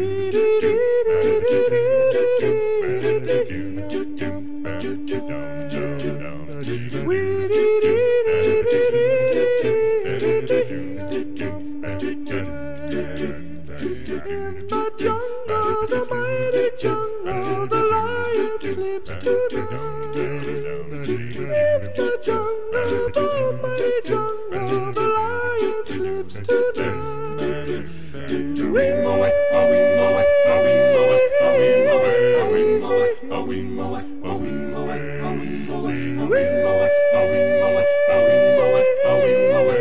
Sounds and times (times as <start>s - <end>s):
Music: 0.0s - 39.8s.